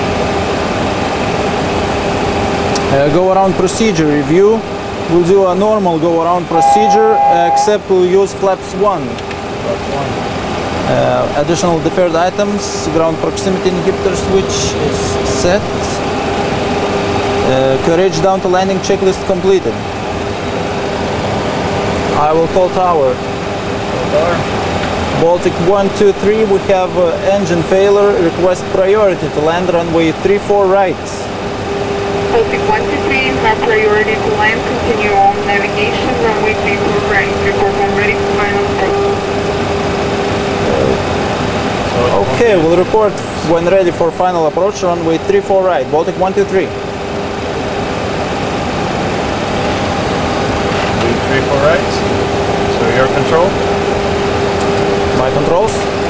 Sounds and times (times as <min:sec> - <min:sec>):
Aircraft: 0:00.0 - 0:07.3, 0:08.1 - 0:56.0
Speech: 0:02.8 - 0:10.2, 0:10.8 - 0:16.0, 0:17.4 - 0:19.8, 0:22.2 - 0:23.2, 0:24.0 - 0:24.4, 0:25.2 - 0:31.3, 0:32.4 - 0:39.0, 0:40.6 - 0:41.0, 0:41.9 - 0:46.7, 0:51.0 - 0:52.0, 0:52.7 - 0:53.6, 0:55.1 - 0:55.9.